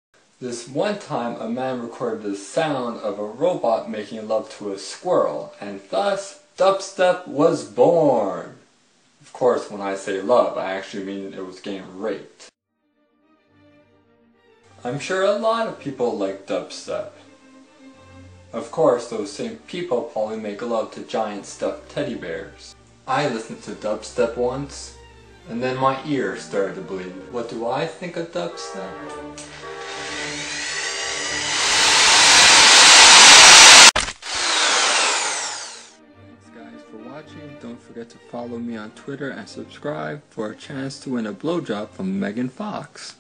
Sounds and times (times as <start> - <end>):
Speech: 0.4 - 8.6, 9.2 - 12.6, 14.8 - 17.2, 18.6 - 29.2, 36.4 - 43.2
Music: 9.9 - 32.2, 35.8 - 43.2.